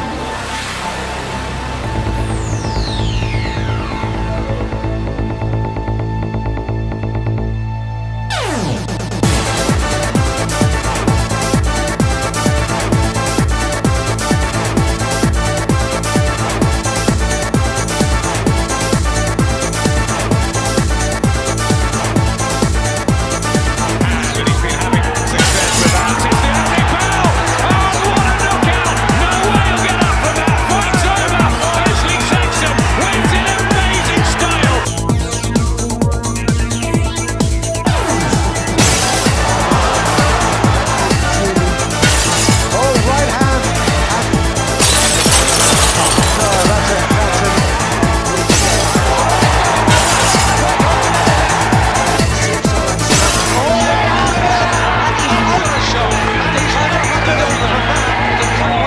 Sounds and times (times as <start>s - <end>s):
Music: 0.0s - 58.8s.